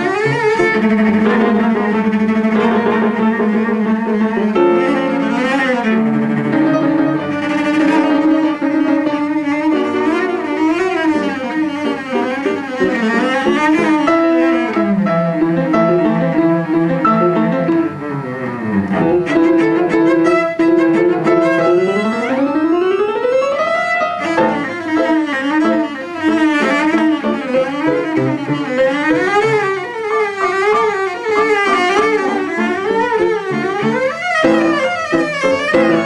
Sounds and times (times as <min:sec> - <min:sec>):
Double bass: 0:00.0 - 0:22.8, 0:30.6 - 0:36.0
Cello: 0:00.0 - 0:36.0.